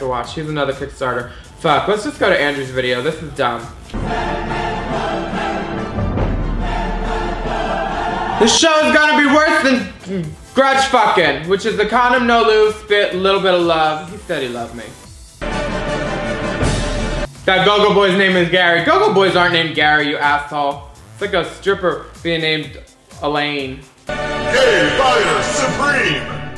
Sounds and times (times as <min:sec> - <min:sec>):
Speech: 0:00.0 - 0:03.7, 0:08.4 - 0:15.0, 0:17.5 - 0:23.8, 0:24.6 - 0:26.2
Music: 0:00.0 - 0:26.5.